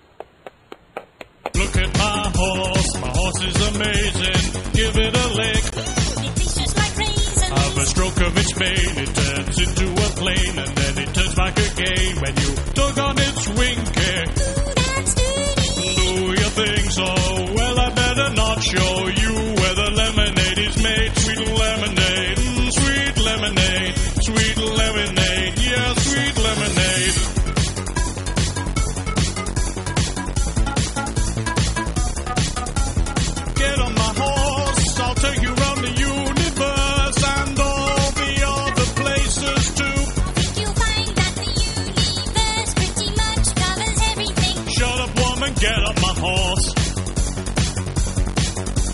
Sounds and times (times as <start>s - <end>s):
Music: 1.5s - 48.9s.